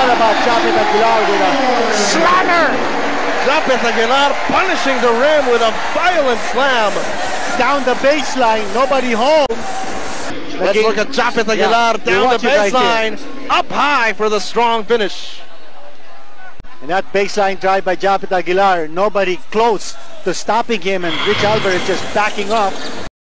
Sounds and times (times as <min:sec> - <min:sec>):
Speech: 0:07.6 - 0:09.6, 0:10.6 - 0:15.4, 0:16.8 - 0:22.9.